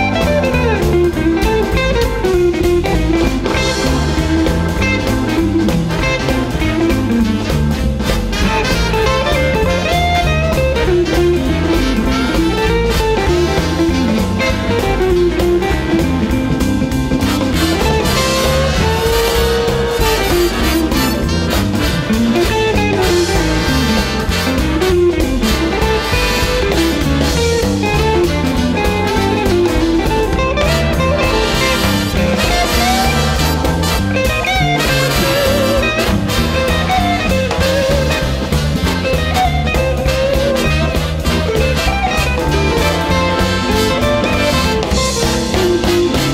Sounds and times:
Piano: 0.0 - 46.3.

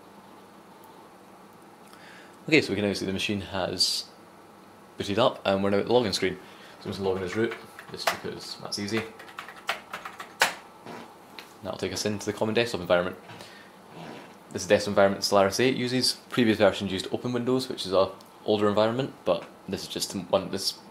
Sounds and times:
Inside, small room: 0.0 - 20.9
Speech: 2.5 - 4.2, 5.0 - 9.2, 11.6 - 13.2, 14.5 - 20.9
Typewriter: 8.9 - 10.6.

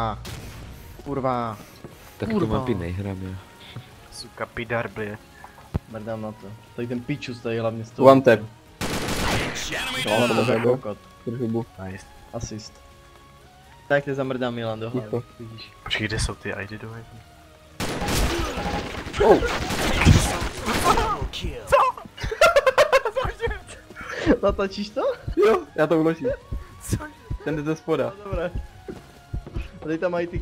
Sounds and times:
Music: 0.0 - 30.4.

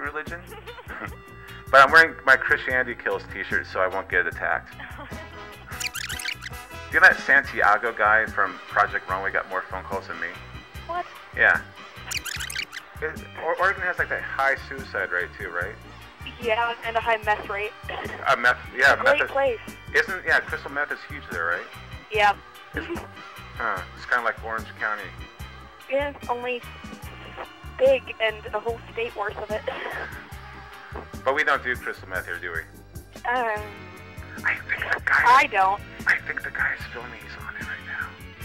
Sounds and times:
Music: 0.0 - 38.4
Speech: 1.8 - 4.7, 7.0 - 10.4, 11.4 - 11.6, 13.0 - 25.1, 25.9 - 26.6, 27.8 - 30.1, 31.3 - 32.6, 33.3 - 33.7, 34.4 - 38.1.

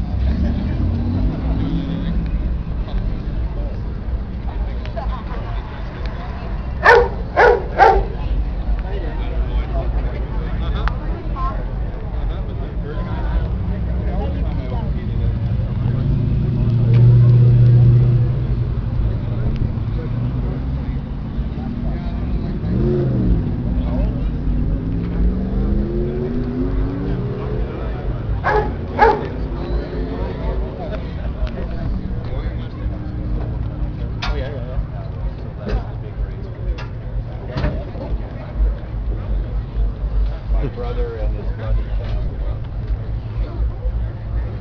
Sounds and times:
Accelerating, revving, vroom: 0.0 - 2.4, 15.8 - 18.8, 19.8 - 30.6
Car: 0.0 - 44.6
Speech: 0.1 - 17.5, 18.3 - 25.3, 25.9 - 44.6.

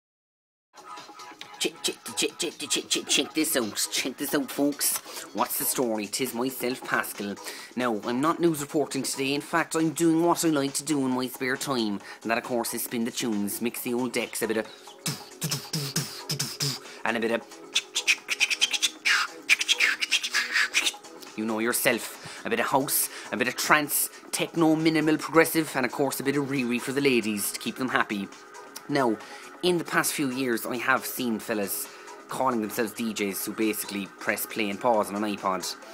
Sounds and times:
Music: 0.8 - 35.9
Speech: 1.6 - 14.7, 17.0 - 17.4, 21.3 - 35.8.

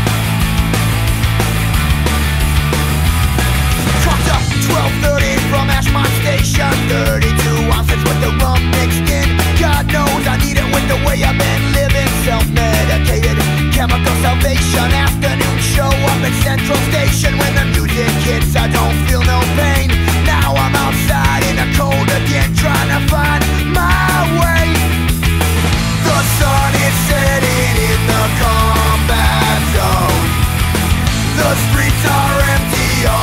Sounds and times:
Music: 0.0 - 33.2.

